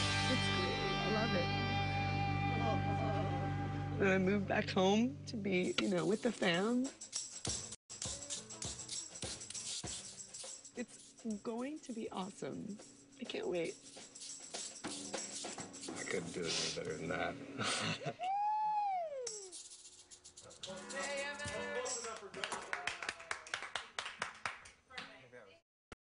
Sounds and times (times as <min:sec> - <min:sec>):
Music: 0:00.0 - 0:06.9, 0:07.5 - 0:16.8.